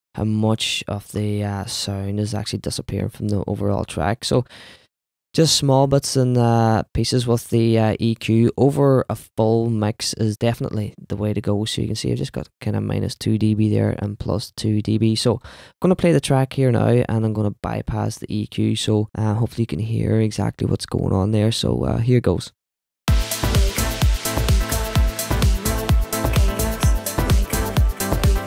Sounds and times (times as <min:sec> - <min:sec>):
Speech: 0:00.2 - 0:04.5, 0:05.4 - 0:22.6.